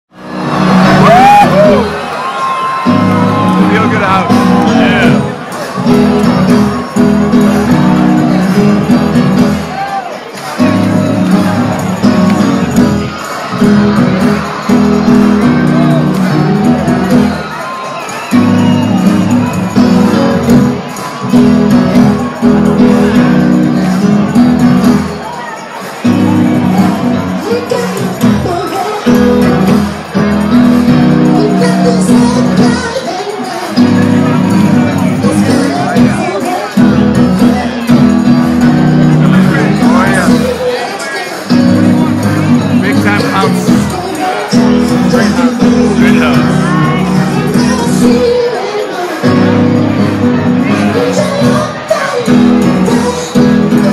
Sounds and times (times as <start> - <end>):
Inside, large room or hall: 0.1 - 53.9
Music: 0.1 - 53.9
Speech: 3.5 - 5.8, 31.4 - 53.9.